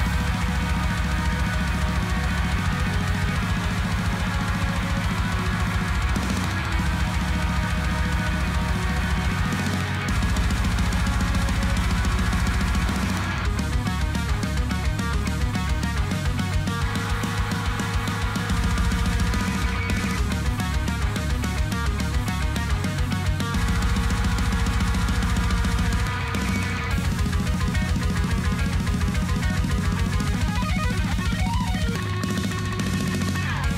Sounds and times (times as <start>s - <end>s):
Guitar: 0.0s - 33.7s.